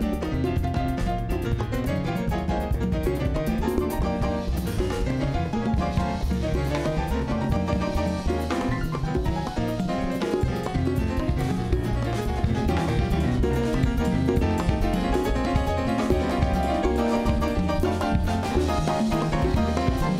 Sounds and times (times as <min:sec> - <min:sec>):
Musical instrument: 0:00.0 - 0:20.1
Salsa music: 0:00.0 - 0:20.1.